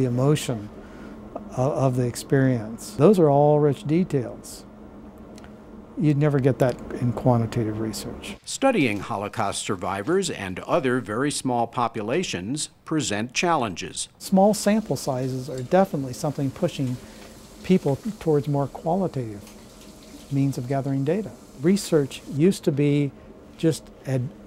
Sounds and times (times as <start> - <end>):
Speech: 0.0 - 0.7, 1.4 - 4.7, 6.0 - 17.0, 17.6 - 19.4, 20.3 - 24.4.